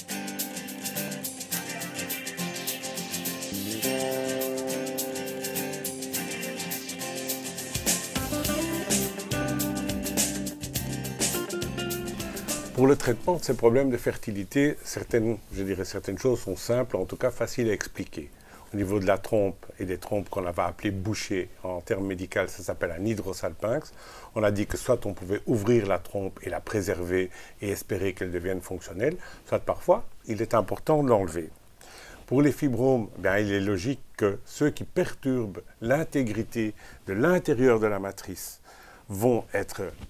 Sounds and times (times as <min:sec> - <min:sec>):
Speech: 0:12.8 - 0:31.6, 0:32.3 - 0:40.0.